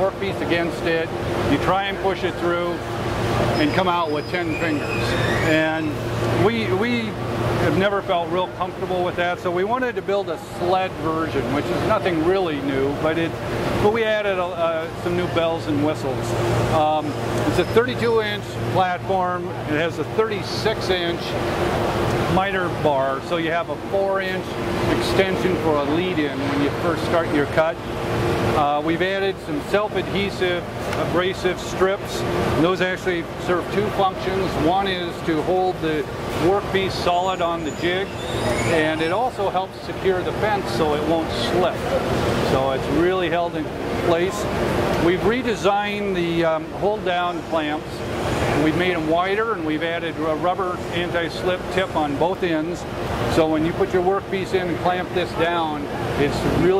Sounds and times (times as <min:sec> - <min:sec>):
Speech: 0:00.0 - 0:02.9, 0:03.5 - 0:21.4, 0:22.2 - 0:27.8, 0:28.5 - 0:38.1, 0:38.7 - 0:56.7.